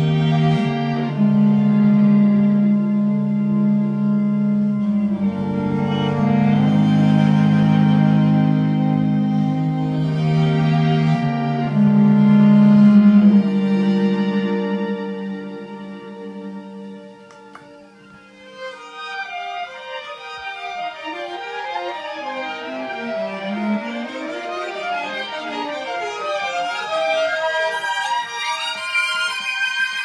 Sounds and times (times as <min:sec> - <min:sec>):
Violin, fiddle: 0:00.0 - 0:30.0.